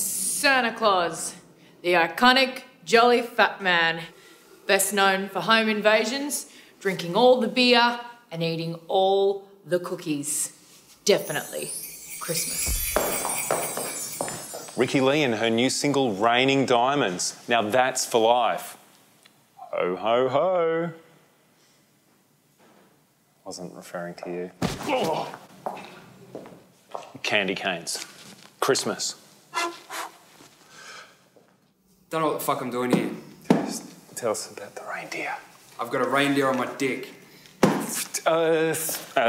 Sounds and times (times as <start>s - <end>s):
Christmas music: 11.0s - 16.0s.